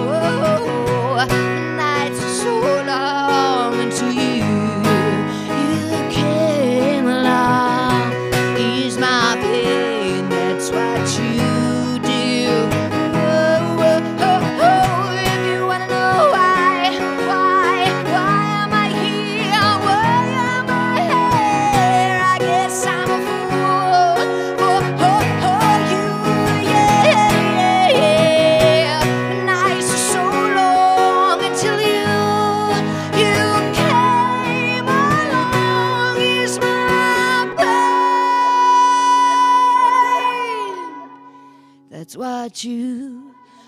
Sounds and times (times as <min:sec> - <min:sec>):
Pop music: 0:00.0 - 0:41.0.